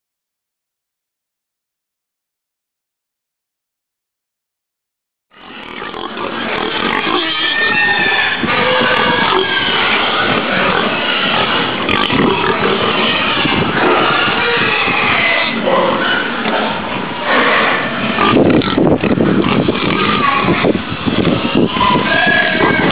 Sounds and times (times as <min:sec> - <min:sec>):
Pig: 0:05.4 - 0:22.9.